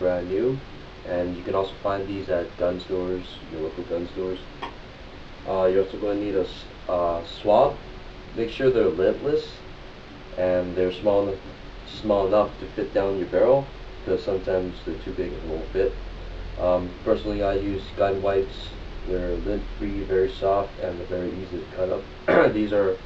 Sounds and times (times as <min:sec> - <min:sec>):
Speech: 0:00.0 - 0:04.5, 0:05.4 - 0:09.6, 0:10.4 - 0:16.0, 0:16.6 - 0:23.0.